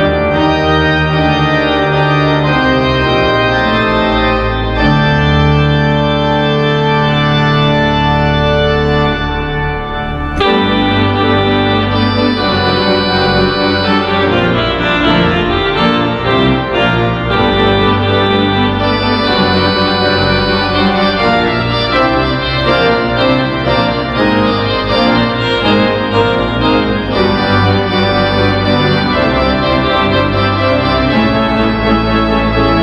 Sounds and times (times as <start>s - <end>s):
Organ: 0.0s - 32.8s.